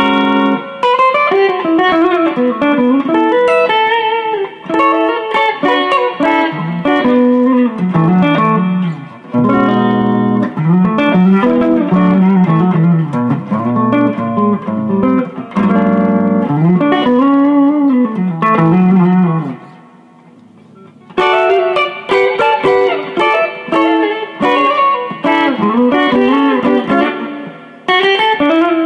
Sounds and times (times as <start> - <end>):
Electric guitar: 0.0 - 28.8.